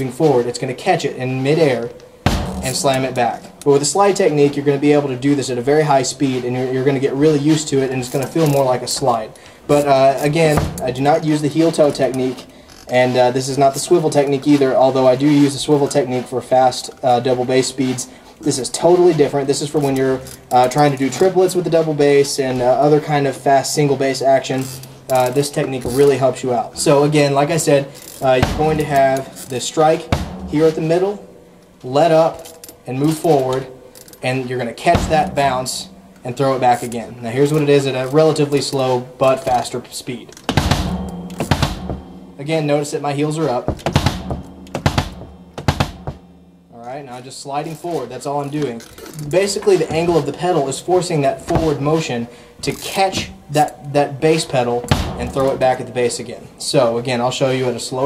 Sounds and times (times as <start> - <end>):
Speech: 0.0 - 2.0, 2.6 - 40.4, 42.4 - 43.8, 46.7 - 58.0
Bass drum: 2.2 - 4.8, 10.5 - 11.2, 28.4 - 31.6, 34.9 - 36.6, 40.5 - 42.6, 43.6 - 46.8, 54.9 - 55.9
Snare drum: 2.3 - 5.0, 10.5 - 11.8, 28.2 - 31.3, 34.9 - 36.4, 40.5 - 42.5, 43.7 - 46.4, 54.9 - 55.7.